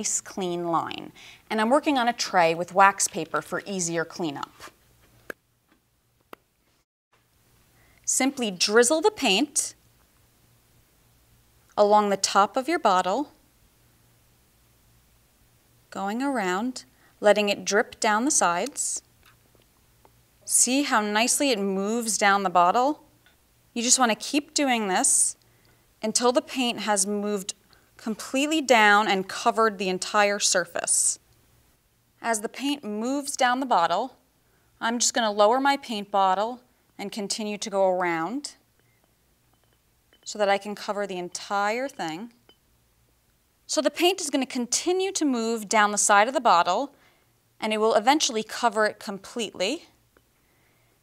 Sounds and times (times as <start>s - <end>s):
Speech: 0.0s - 4.6s, 8.1s - 9.8s, 11.8s - 13.4s, 16.0s - 19.0s, 20.5s - 23.0s, 23.8s - 25.4s, 26.0s - 31.2s, 32.2s - 34.2s, 34.8s - 38.6s, 40.3s - 42.4s, 43.7s - 46.9s, 47.6s - 49.9s.